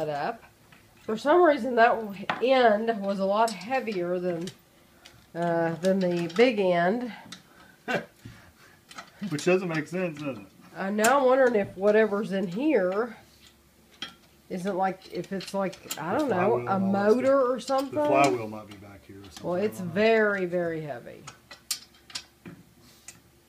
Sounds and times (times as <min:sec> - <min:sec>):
Inside, small room: 0:00.0 - 0:23.4
Speech: 0:16.0 - 0:21.1.